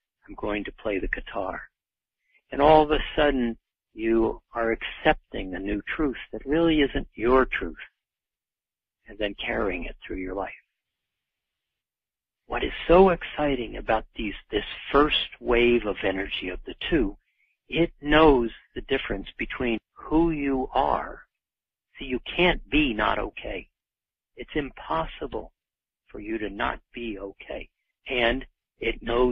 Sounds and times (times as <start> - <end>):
Narration, monologue: 0.0 - 29.3.